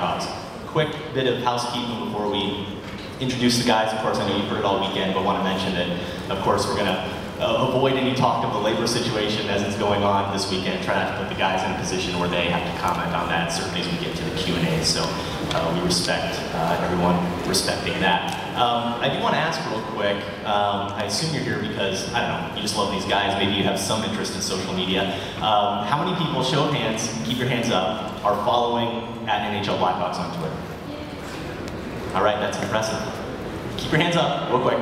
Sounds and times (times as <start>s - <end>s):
Speech: 0.0s - 31.4s, 32.1s - 33.2s, 33.8s - 34.8s.